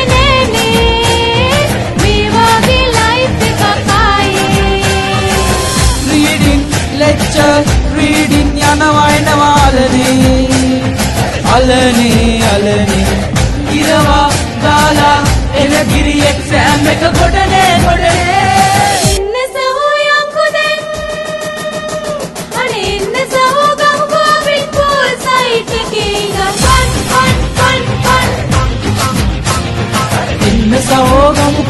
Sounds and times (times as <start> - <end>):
Music of Asia: 0.0 - 19.2, 20.8 - 31.6.